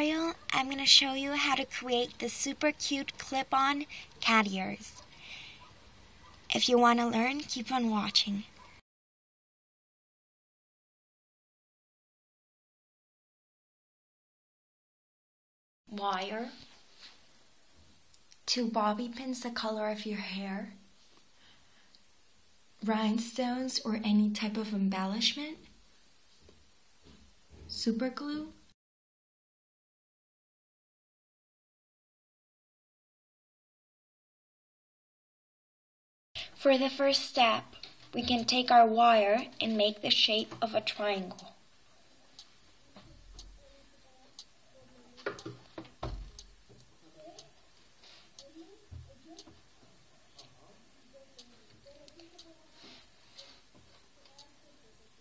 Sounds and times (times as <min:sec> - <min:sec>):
Speech: 0:00.0 - 0:05.1, 0:06.5 - 0:08.5, 0:15.9 - 0:16.7, 0:18.5 - 0:20.8, 0:22.8 - 0:25.7, 0:27.6 - 0:28.6, 0:36.5 - 0:41.6, 0:42.9 - 0:45.4, 0:50.5 - 0:53.1, 0:54.0 - 0:55.2.